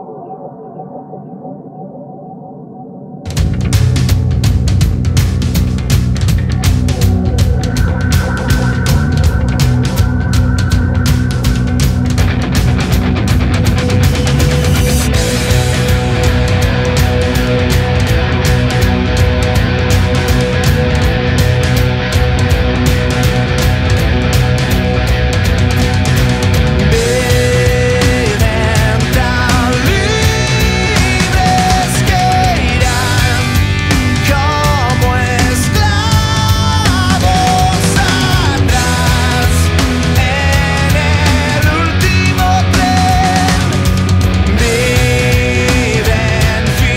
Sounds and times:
Music: 3.3 - 46.9.

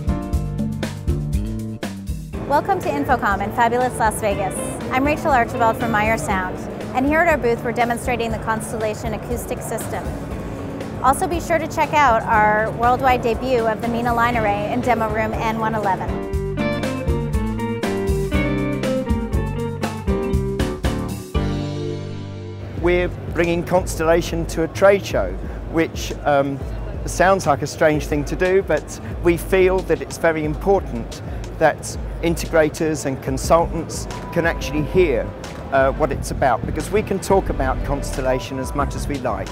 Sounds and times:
Music: 0.0 - 39.5
Speech: 2.5 - 10.1, 22.8 - 39.5.

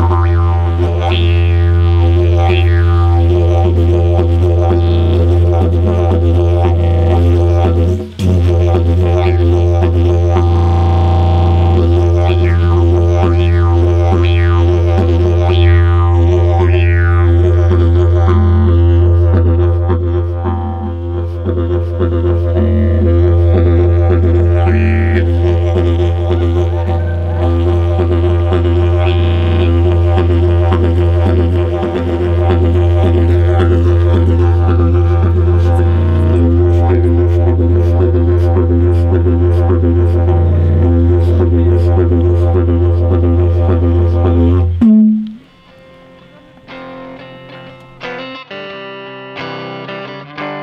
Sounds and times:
Didgeridoo: 0.0 - 48.1.

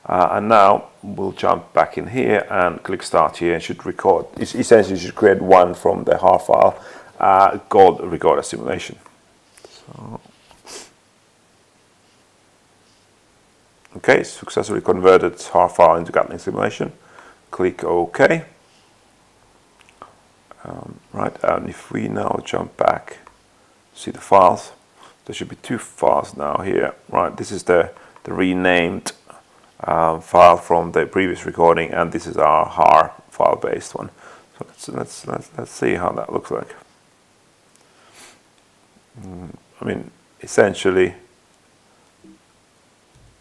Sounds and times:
Speech: 0.0 - 9.1, 9.7 - 10.3, 13.9 - 18.6, 20.5 - 23.4, 24.0 - 36.9, 39.2 - 41.3
Inside, small room: 0.0 - 43.4.

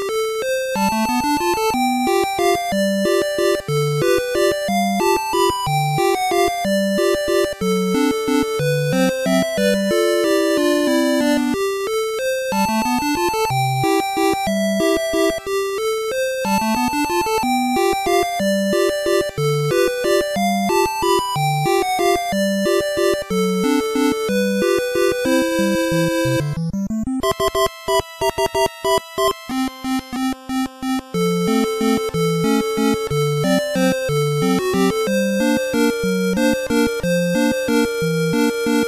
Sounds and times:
Video game music: 0.0 - 38.8.

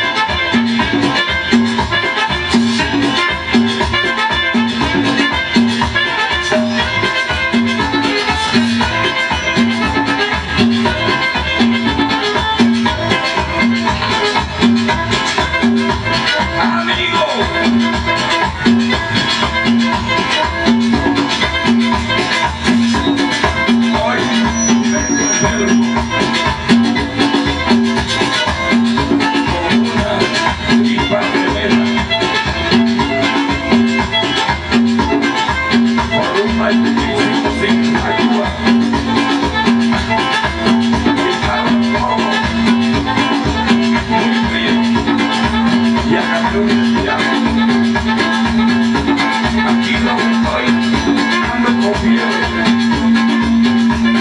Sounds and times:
Music: 0.0 - 54.2.

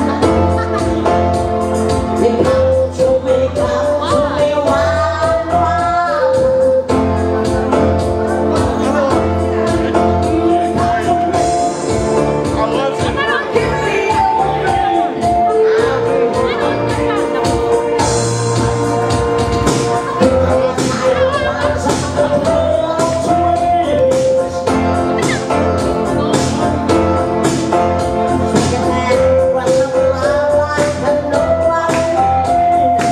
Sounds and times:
Music: 0.0 - 33.1.

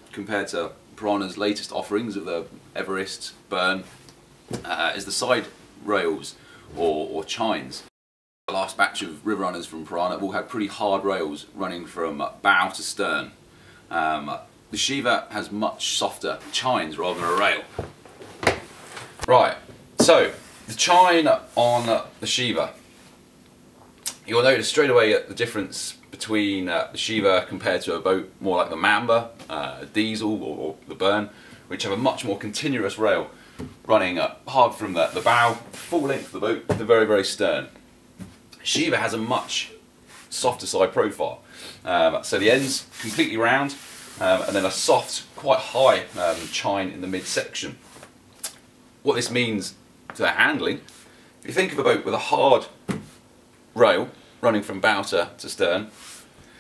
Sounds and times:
Speech: 0.1 - 4.0, 4.6 - 7.9, 8.5 - 17.7, 19.3 - 22.8, 24.1 - 33.3, 33.9 - 37.8, 38.6 - 47.8, 49.0 - 52.8, 53.8 - 56.0.

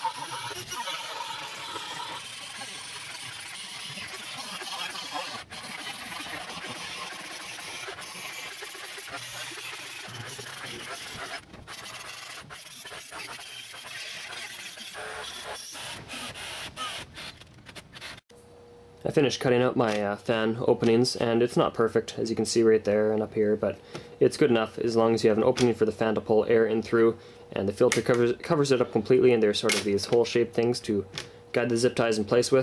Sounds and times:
Ratchet, pawl: 0.0 - 16.4.

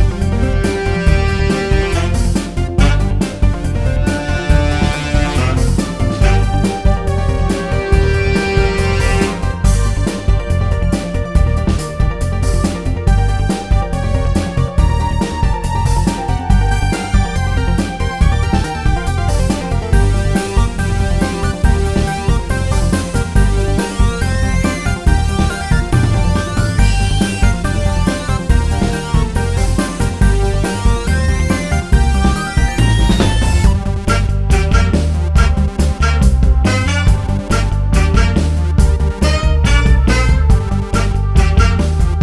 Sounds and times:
Funny music: 0.0 - 42.2.

